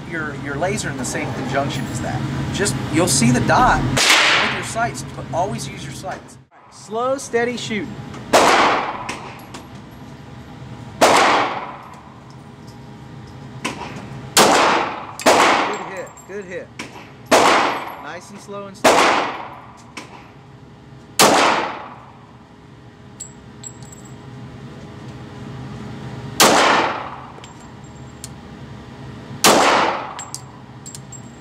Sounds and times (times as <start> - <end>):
Gunshot, gunfire: 4.0 - 4.6, 8.3 - 9.2, 11.0 - 11.8, 14.4 - 15.8, 17.3 - 17.9, 18.8 - 19.5, 21.2 - 21.9, 26.4 - 27.1, 29.4 - 30.2.